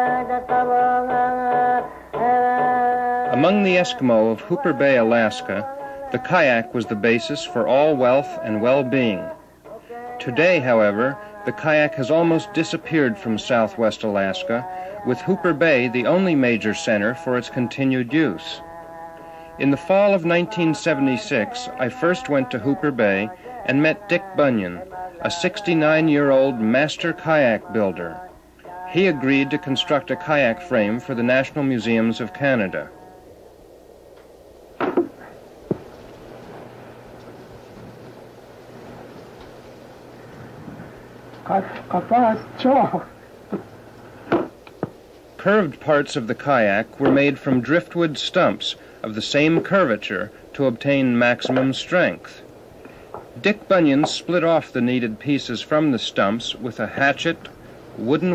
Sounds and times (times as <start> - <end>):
Speech: 3.3 - 9.3, 10.2 - 18.6, 19.6 - 28.2, 28.9 - 32.9, 41.4 - 43.2, 45.4 - 52.4, 53.4 - 58.3.